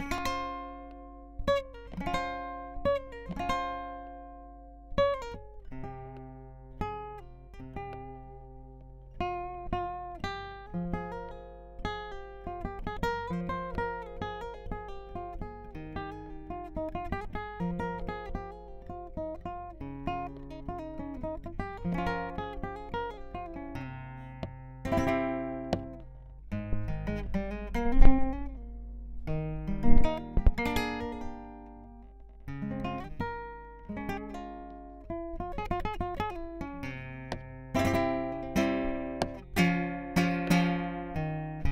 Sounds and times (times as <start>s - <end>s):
Acoustic guitar: 0.0s - 41.7s
Strum: 0.0s - 41.7s.